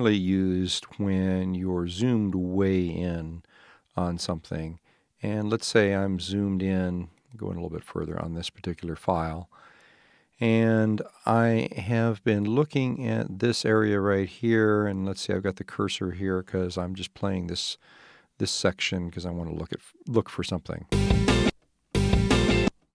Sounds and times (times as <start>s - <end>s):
Speech: 0.0s - 9.6s, 10.4s - 17.8s, 18.4s - 21.0s.